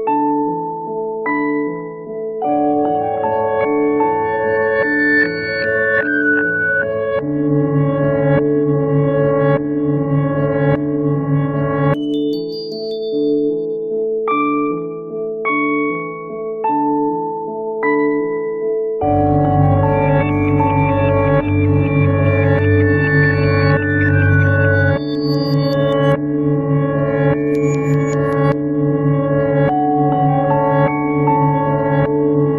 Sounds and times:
Music: 0.0s - 32.5s.

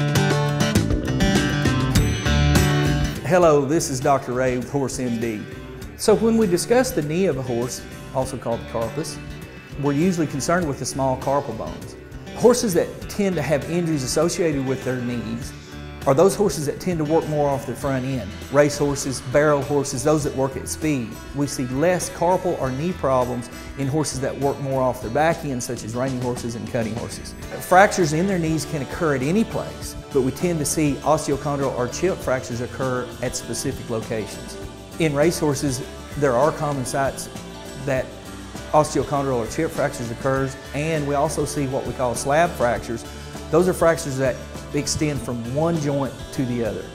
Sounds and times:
Music: 0.0s - 46.9s
Speech: 3.2s - 9.2s, 9.8s - 38.1s, 38.7s - 46.9s.

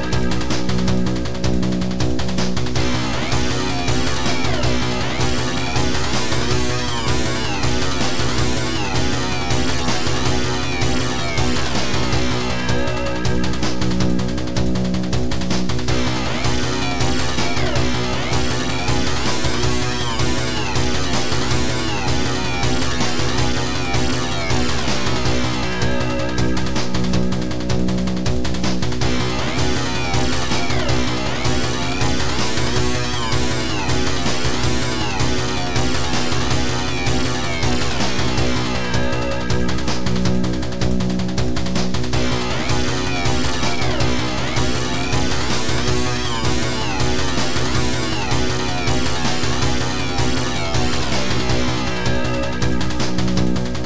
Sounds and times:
Rhythm and blues: 0.0s - 53.8s.

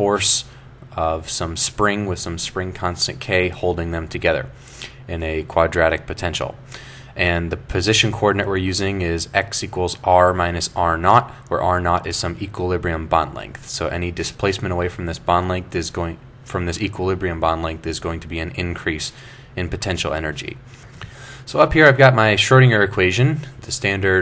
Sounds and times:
Speech: 0.0s - 6.6s, 7.2s - 20.6s, 21.5s - 24.2s.

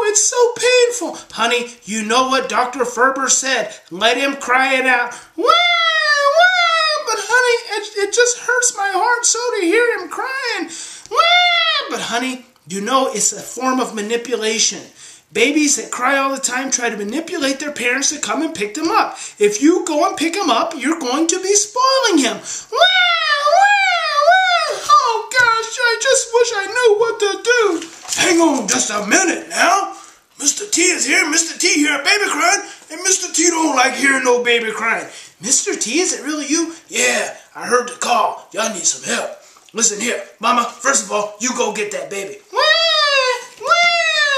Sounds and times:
Speech: 0.0s - 44.3s.

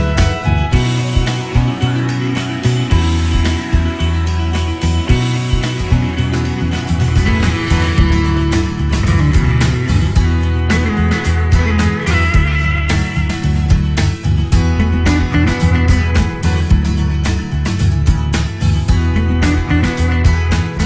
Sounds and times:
Music: 0.0s - 20.8s.

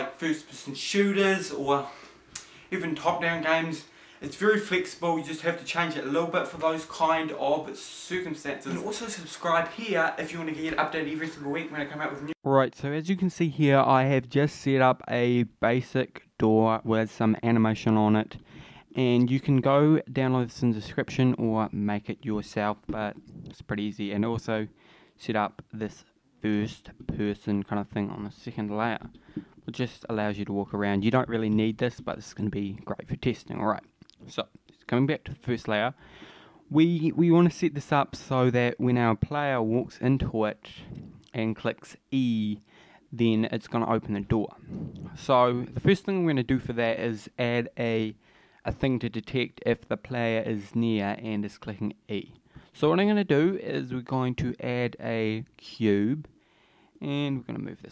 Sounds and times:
Speech: 0.0s - 2.0s, 2.7s - 36.0s, 36.7s - 56.3s, 57.0s - 57.9s.

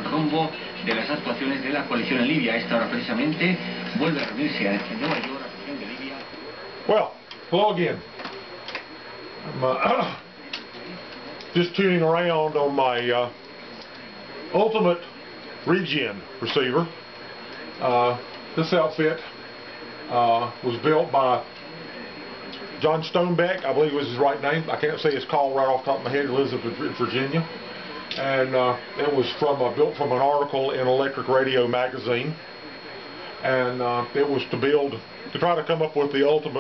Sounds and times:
Speech: 0.0s - 36.6s.

